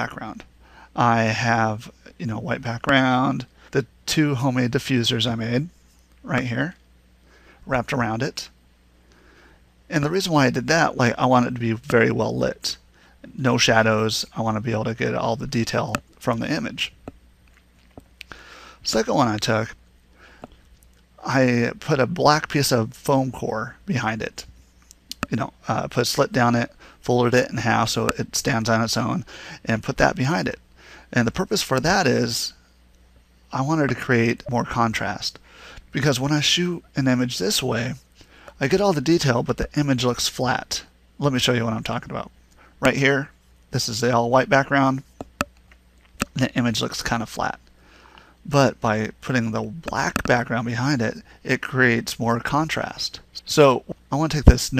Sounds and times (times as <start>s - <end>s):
Speech: 0.0s - 6.8s, 7.7s - 8.6s, 9.9s - 17.0s, 18.8s - 19.8s, 21.2s - 24.5s, 25.1s - 32.6s, 33.5s - 45.1s, 46.3s - 47.7s, 48.5s - 54.7s.